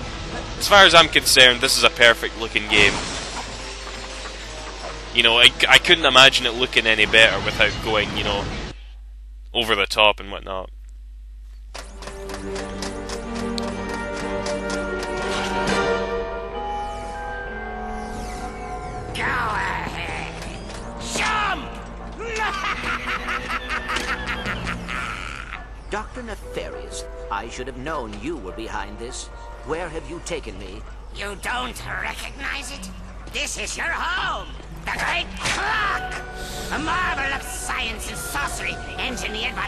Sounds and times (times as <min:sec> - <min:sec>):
Music: 0:00.0 - 0:08.1, 0:11.8 - 0:24.9, 0:25.7 - 0:39.6
Speech: 0:00.6 - 0:03.0, 0:05.2 - 0:08.5, 0:09.6 - 0:10.7, 0:25.9 - 0:32.8.